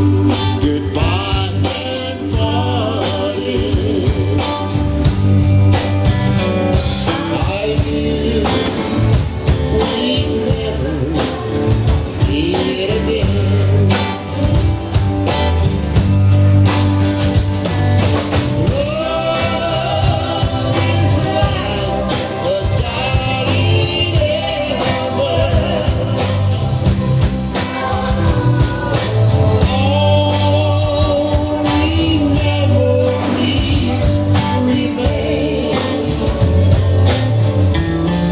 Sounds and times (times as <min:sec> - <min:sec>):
Music: 0:00.0 - 0:38.3.